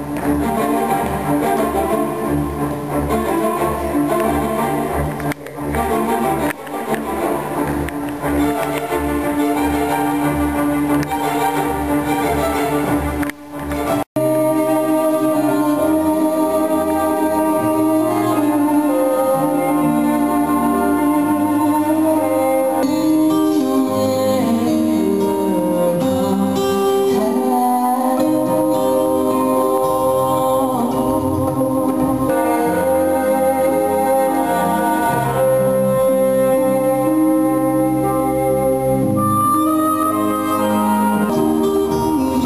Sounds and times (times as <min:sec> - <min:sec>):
Inside, large room or hall: 0:00.0 - 0:42.4
Music: 0:00.0 - 0:42.4.